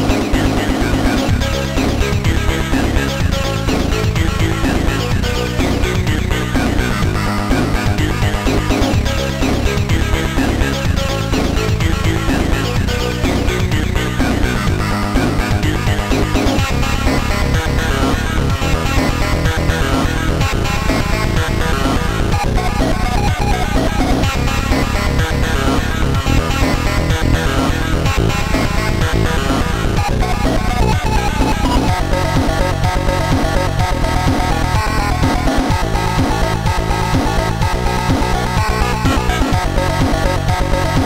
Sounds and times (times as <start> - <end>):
Trance music: 0.0 - 41.0.